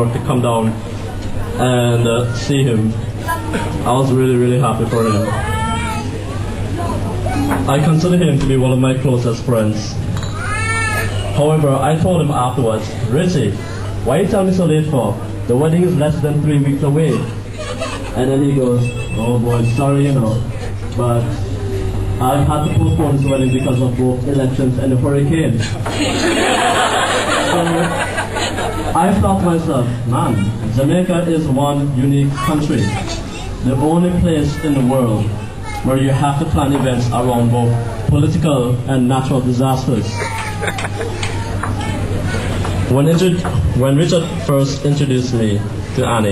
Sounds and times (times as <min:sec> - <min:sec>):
Male speech, man speaking: 0:00.0 - 0:00.8, 0:01.6 - 0:03.1, 0:03.8 - 0:05.4, 0:07.7 - 0:10.0, 0:11.4 - 0:17.4, 0:18.2 - 0:21.4, 0:22.2 - 0:25.8, 0:27.4 - 0:28.0, 0:29.0 - 0:40.3, 0:42.9 - 0:46.3.